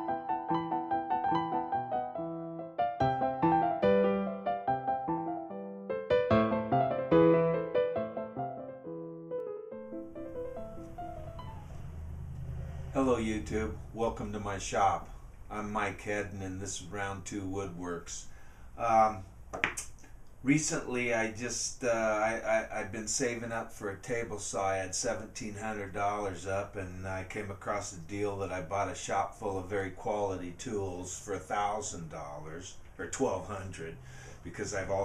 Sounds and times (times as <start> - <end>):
Speech: 13.0 - 19.3, 20.4 - 35.0.